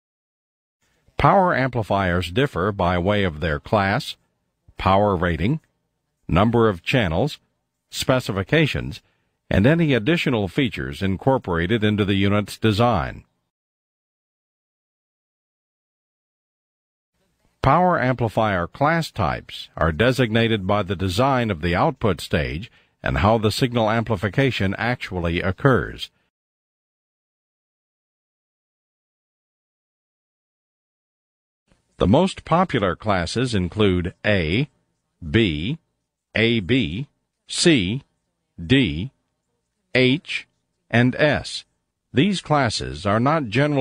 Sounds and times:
Speech: 1.2 - 13.3, 17.3 - 26.3, 32.0 - 39.2, 39.9 - 43.8.

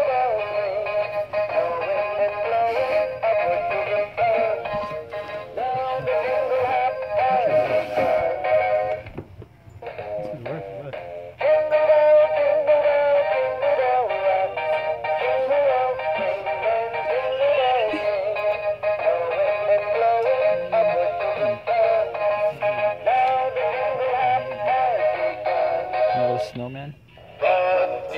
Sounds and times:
Music: 0.0 - 28.1.

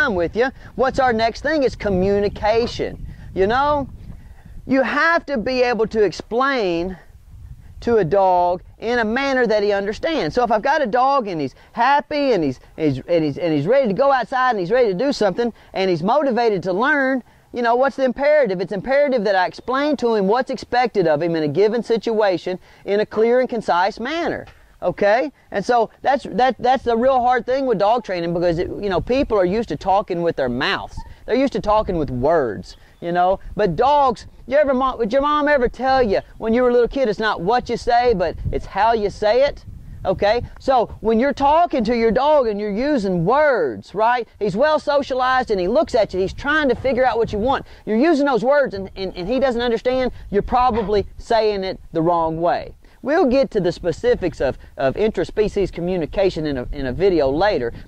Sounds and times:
Speech: 0.0 - 3.9, 4.7 - 7.1, 7.8 - 57.8.

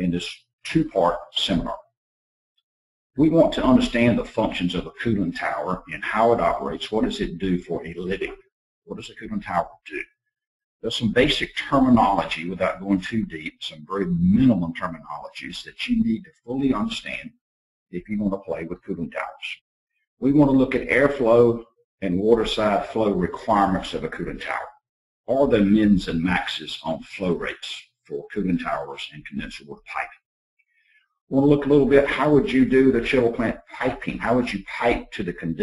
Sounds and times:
Speech: 0.0 - 1.8, 3.2 - 10.0, 10.8 - 17.3, 18.0 - 19.6, 20.2 - 30.2, 31.3 - 35.6.

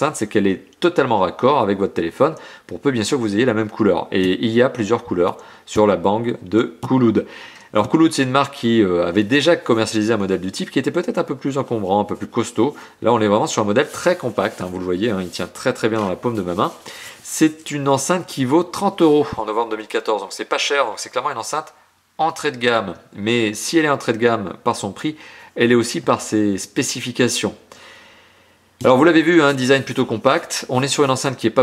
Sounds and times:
Speech: 0.0 - 27.6, 28.8 - 31.6.

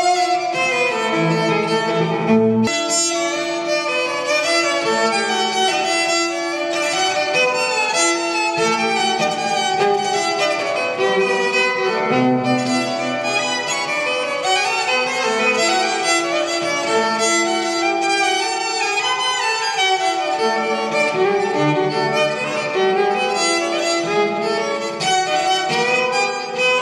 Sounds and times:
Violin, fiddle: 0.0 - 26.8.

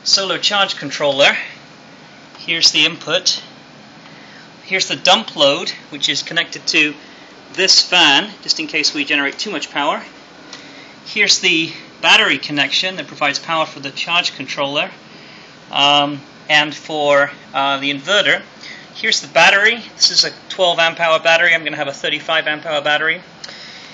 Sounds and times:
Speech: 0.0 - 1.6, 2.4 - 3.6, 4.6 - 7.0, 7.6 - 10.2, 11.1 - 15.0, 15.7 - 23.3.

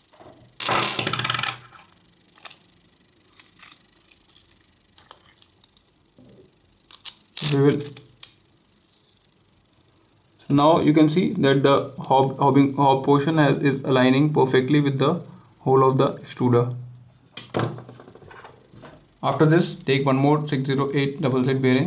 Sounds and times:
Speech: 7.4 - 8.0, 10.4 - 16.8, 19.2 - 21.8.

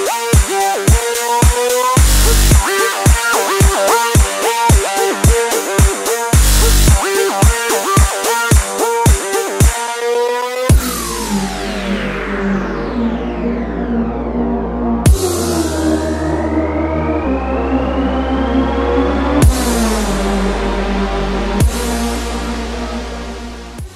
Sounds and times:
Music: 0.0 - 23.9.

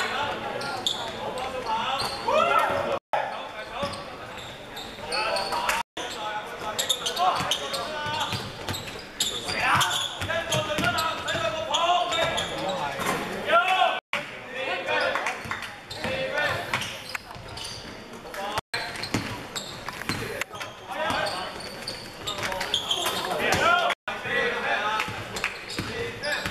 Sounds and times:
Speech: 0.0 - 8.5, 9.2 - 19.1, 20.1 - 26.5
Inside, large room or hall: 0.0 - 26.5
Basketball bounce: 10.8 - 11.0.

